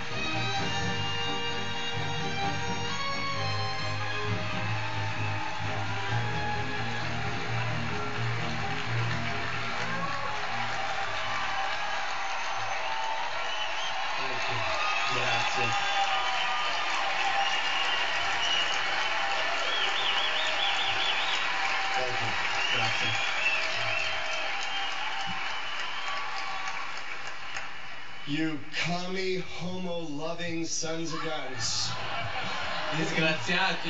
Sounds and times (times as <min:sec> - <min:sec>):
Male speech, man speaking: 0:14.2 - 0:15.8, 0:22.0 - 0:23.2, 0:28.3 - 0:32.0, 0:33.0 - 0:33.8.